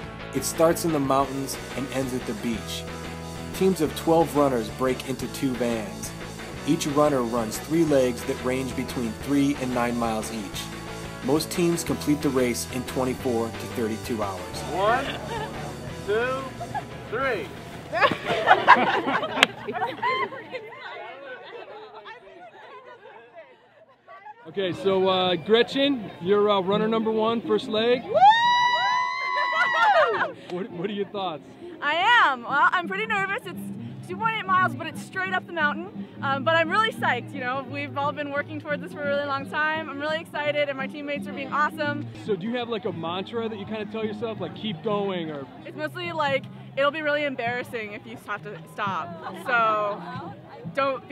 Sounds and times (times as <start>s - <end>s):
Music: 0.0s - 20.9s, 24.6s - 51.1s.